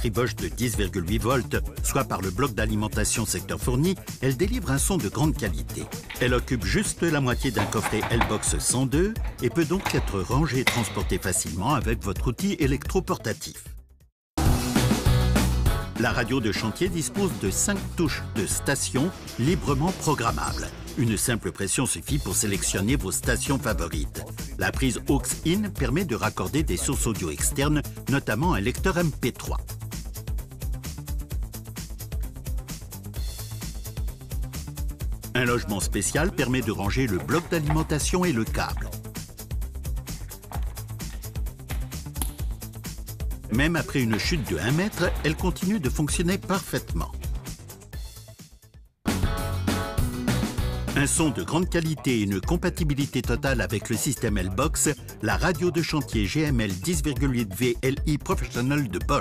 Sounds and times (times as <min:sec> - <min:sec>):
Speech: 0:00.0 - 0:13.7, 0:16.0 - 0:29.6, 0:35.3 - 0:39.0, 0:43.5 - 0:47.2, 0:51.0 - 0:59.2
Music: 0:00.0 - 0:59.2.